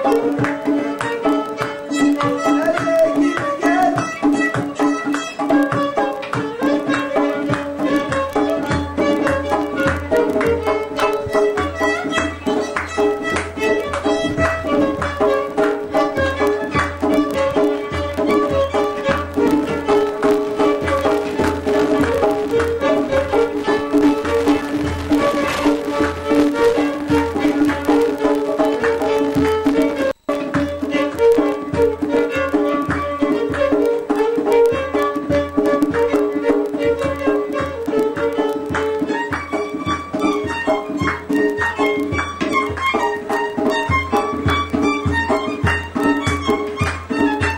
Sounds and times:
Violin, fiddle: 0:00.0 - 0:47.5.

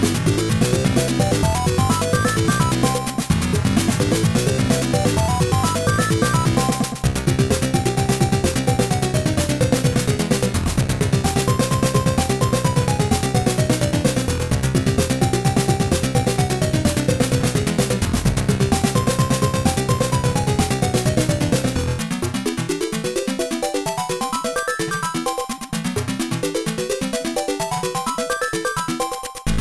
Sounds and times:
Soundtrack music: 0:00.0 - 0:29.6
Video game music: 0:00.0 - 0:29.6.

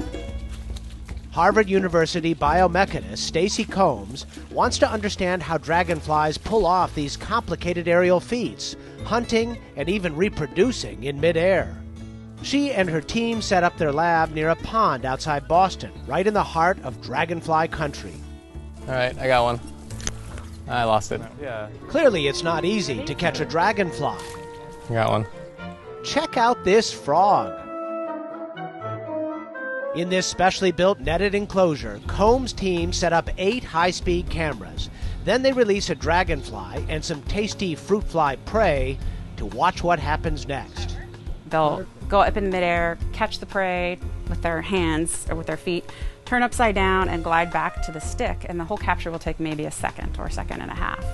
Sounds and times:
Music: 0:00.0 - 0:51.1
Speech: 0:01.4 - 0:11.7, 0:12.4 - 0:18.2, 0:18.9 - 0:19.6, 0:20.7 - 0:24.2, 0:24.9 - 0:25.3, 0:30.0 - 0:41.0, 0:41.6 - 0:51.0.

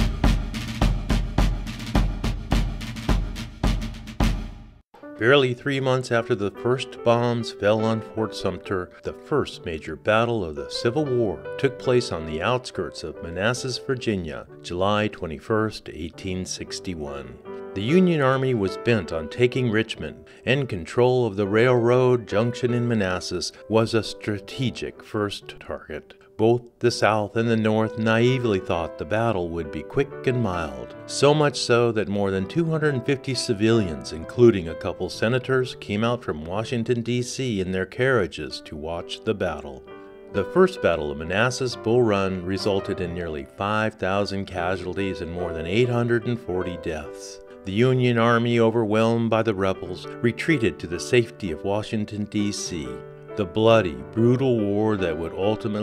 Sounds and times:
Music: 0:00.0 - 0:55.8
Speech: 0:05.2 - 0:39.8, 0:40.4 - 0:55.8.

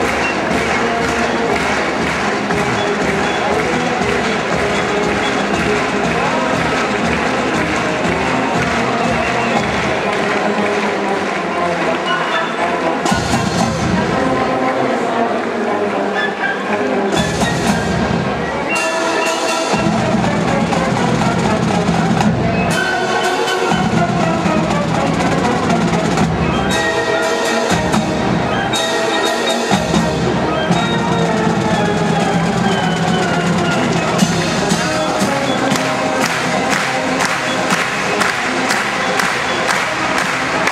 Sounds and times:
Music: 0:00.0 - 0:40.7.

